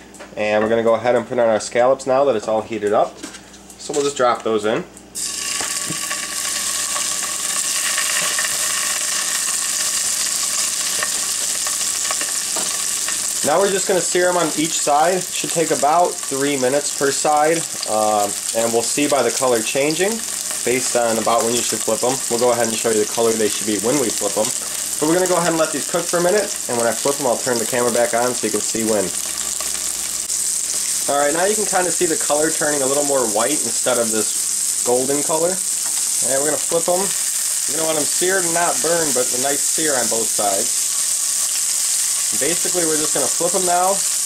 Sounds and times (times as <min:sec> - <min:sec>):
Speech: 0:00.4 - 0:03.2, 0:03.8 - 0:04.9, 0:13.4 - 0:29.2, 0:31.1 - 0:35.6, 0:36.2 - 0:40.7, 0:42.3 - 0:44.1
Frying (food): 0:05.2 - 0:44.2.